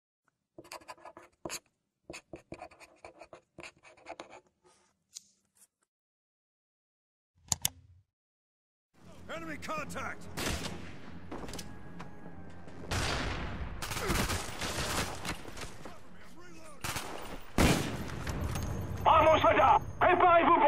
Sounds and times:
Writing: 0.6s - 5.0s
Speech: 9.0s - 10.2s, 15.9s - 16.8s, 19.1s - 20.6s.

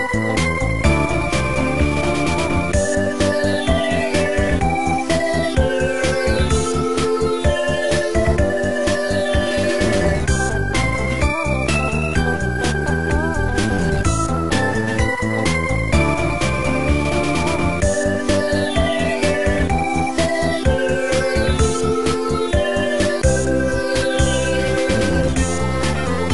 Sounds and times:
Music: 0.0s - 26.3s.

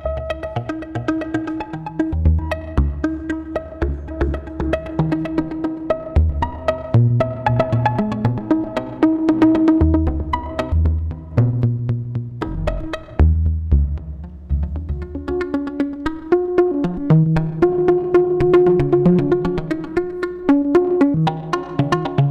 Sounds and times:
Music: 0.0s - 22.3s.

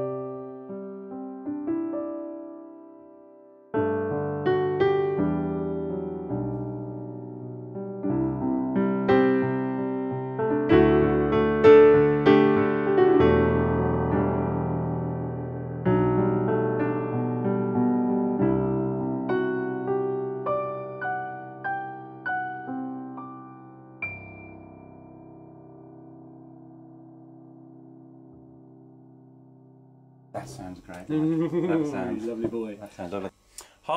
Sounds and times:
Music: 0.0s - 30.8s.

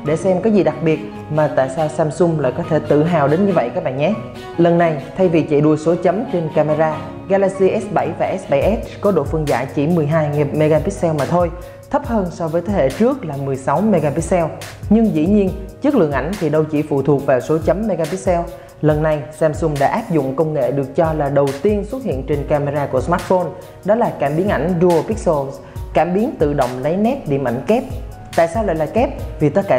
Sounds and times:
Music: 0.0s - 29.7s
Speech: 0.0s - 29.7s.

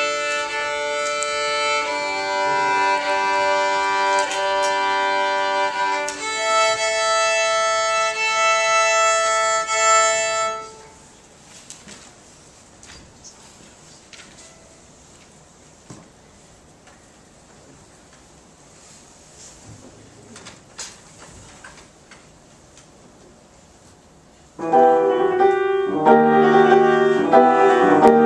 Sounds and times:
Musical instrument: 0.0s - 11.0s, 24.6s - 28.2s.

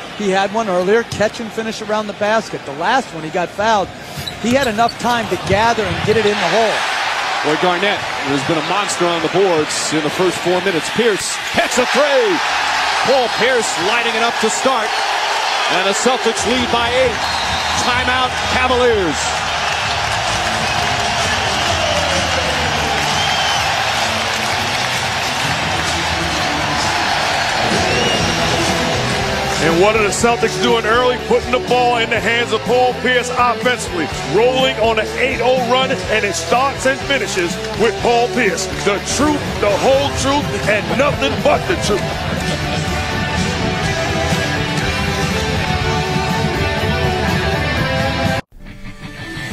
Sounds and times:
Speech: 0.2s - 6.8s, 7.5s - 12.4s, 13.0s - 14.9s, 15.7s - 17.2s, 17.8s - 19.4s, 29.6s - 42.0s
Music: 12.3s - 49.5s.

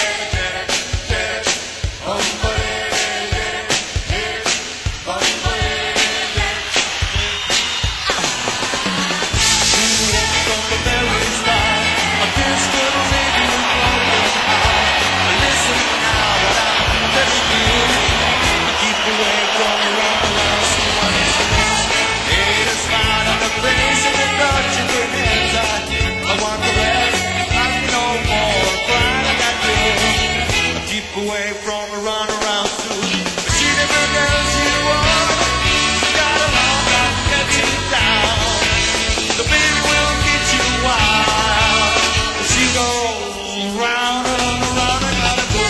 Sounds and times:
Music: 0.0s - 45.7s.

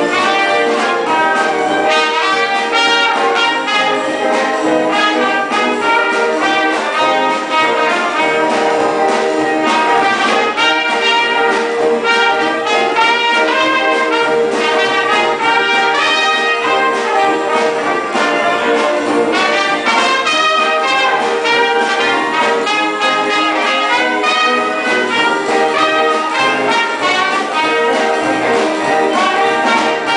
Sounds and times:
Music: 0.0s - 30.1s.

